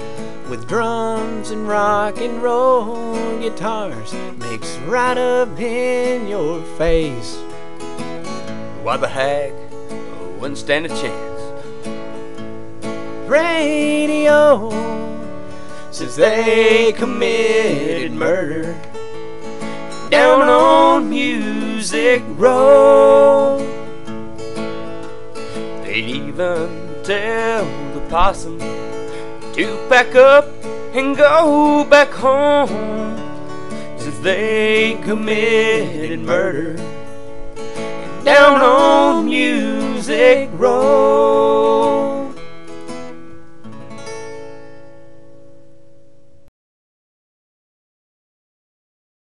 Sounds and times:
Music: 0.0s - 46.5s
Singing: 15.9s - 18.8s, 20.1s - 23.7s, 38.2s - 42.4s.

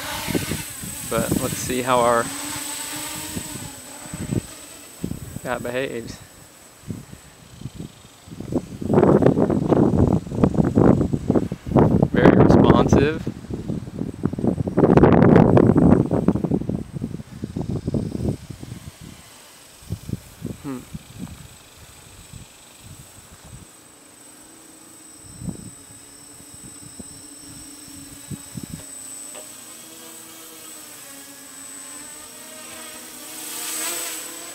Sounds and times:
Wind: 0.0s - 34.5s
Speech: 1.1s - 2.3s, 5.4s - 6.3s, 12.2s - 13.3s.

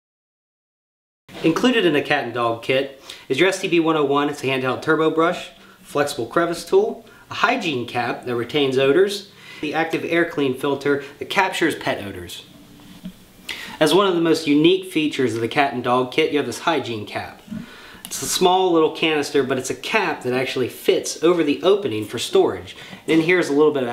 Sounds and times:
Speech: 1.4s - 12.5s, 13.8s - 17.5s, 18.1s - 23.9s.

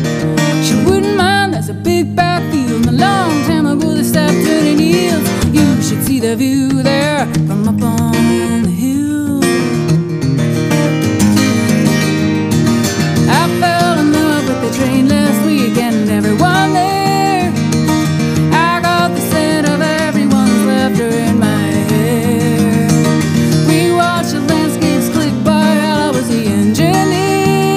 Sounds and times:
Country: 0.0s - 27.7s.

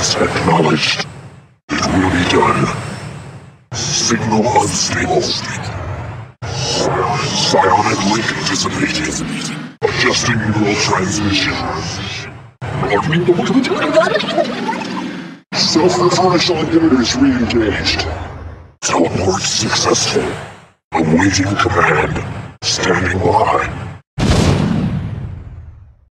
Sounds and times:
Speech: 0.0s - 1.1s, 1.7s - 2.9s, 3.7s - 5.8s, 6.4s - 23.8s
Sound effect: 1.7s - 26.1s.

